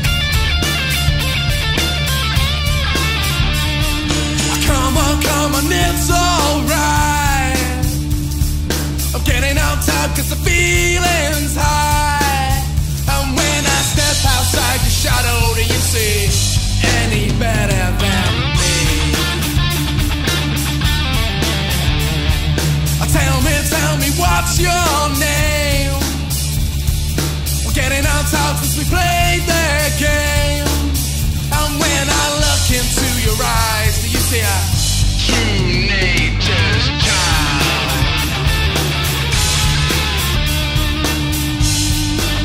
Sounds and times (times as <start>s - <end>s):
Punk rock: 0.0s - 42.4s
Singing: 4.4s - 8.0s, 9.1s - 19.4s, 23.0s - 26.2s, 27.6s - 38.5s.